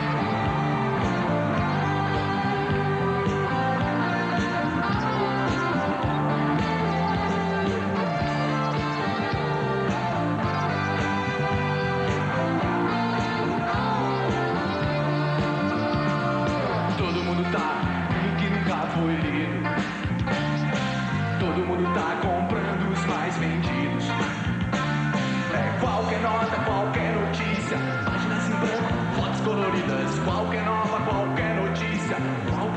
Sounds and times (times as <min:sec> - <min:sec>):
Music: 0:00.0 - 0:32.7.